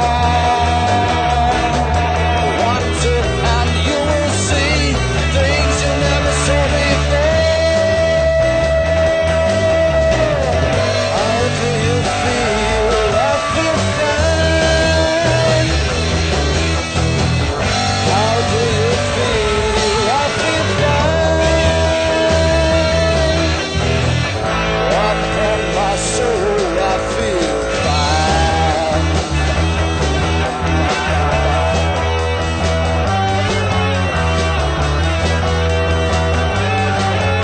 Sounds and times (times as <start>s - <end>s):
Music: 0.0s - 37.4s.